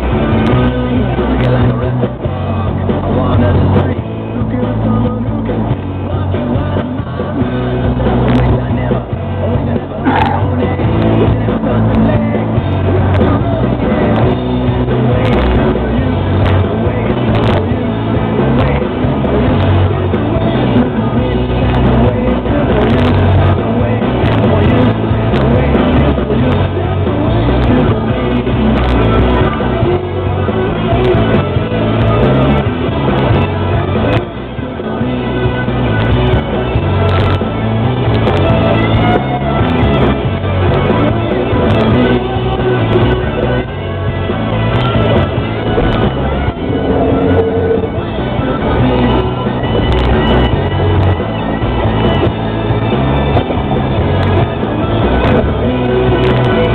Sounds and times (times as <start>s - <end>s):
Music: 0.0s - 56.7s.